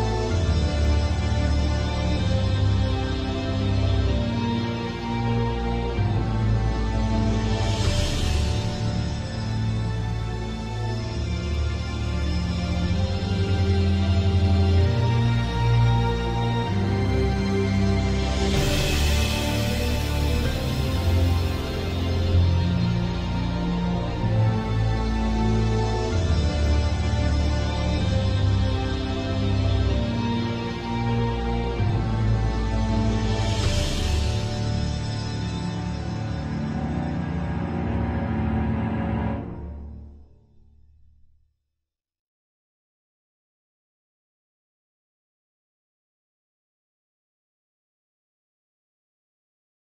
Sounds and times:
Scary music: 0:00.0 - 0:41.2.

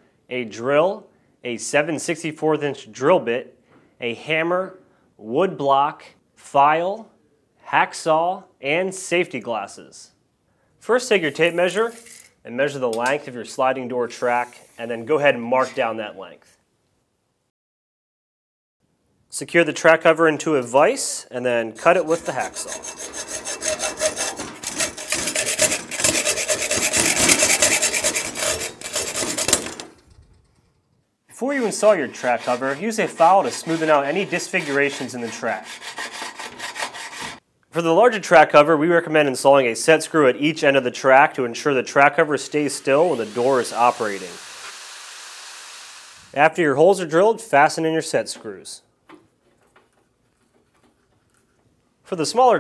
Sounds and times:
Speech: 0:00.3 - 0:10.2, 0:10.8 - 0:16.6, 0:19.3 - 0:22.7, 0:31.3 - 0:35.7, 0:37.7 - 0:44.4, 0:46.4 - 0:48.9, 0:52.1 - 0:52.6.

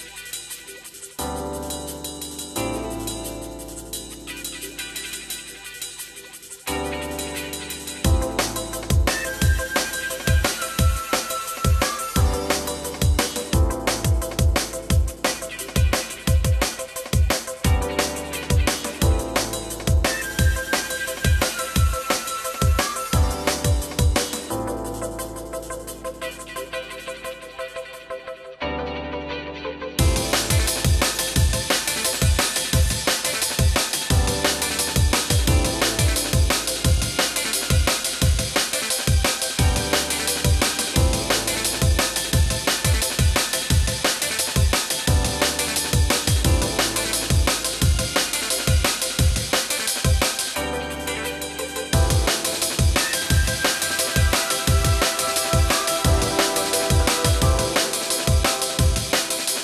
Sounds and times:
Music: 0:00.0 - 0:59.6.

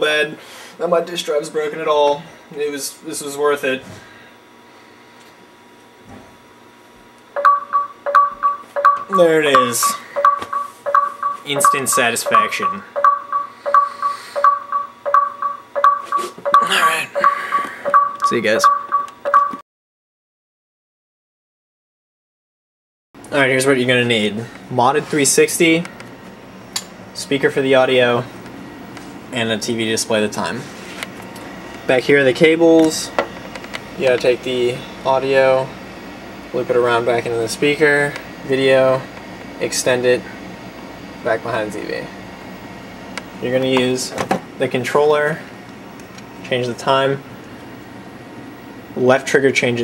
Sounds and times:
Speech: 0:00.0 - 0:04.0, 0:09.1 - 0:10.0, 0:11.5 - 0:12.8, 0:16.6 - 0:17.1, 0:18.3 - 0:18.7, 0:23.3 - 0:25.9, 0:27.2 - 0:28.3, 0:29.3 - 0:30.7, 0:31.9 - 0:33.2, 0:34.0 - 0:35.8, 0:36.5 - 0:40.4, 0:41.2 - 0:42.2, 0:43.4 - 0:45.5, 0:46.4 - 0:47.2, 0:49.0 - 0:49.8
Alarm: 0:07.3 - 0:19.6.

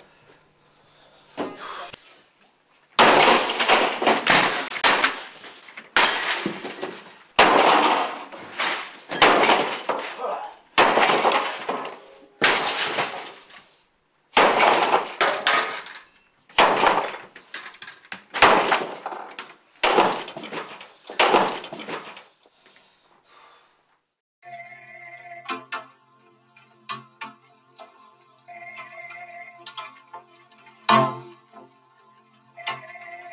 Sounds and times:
Smash, crash: 0:03.0 - 0:13.5, 0:14.4 - 0:15.8, 0:16.6 - 0:17.3, 0:18.4 - 0:22.2.

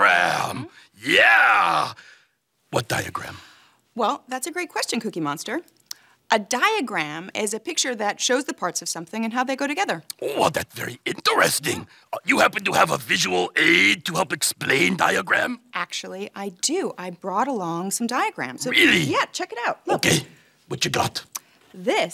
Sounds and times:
Inside, small room: 0:00.0 - 0:22.1
Speech: 0:02.8 - 0:03.4, 0:06.4 - 0:22.1.

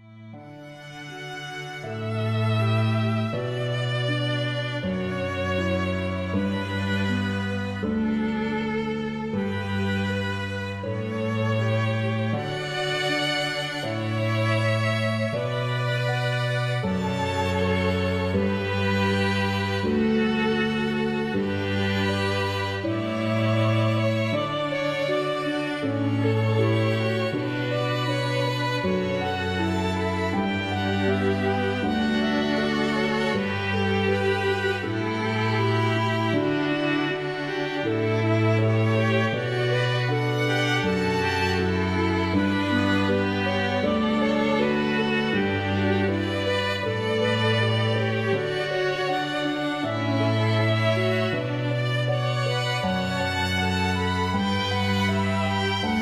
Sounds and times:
Cello: 0:00.0 - 0:56.0.

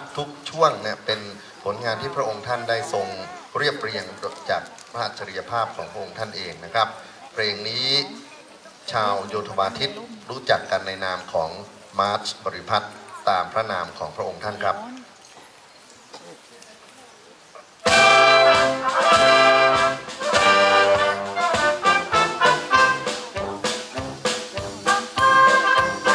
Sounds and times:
Speech: 0:00.0 - 0:15.1
Rustling leaves: 0:00.0 - 0:26.1
Music: 0:17.8 - 0:26.1.

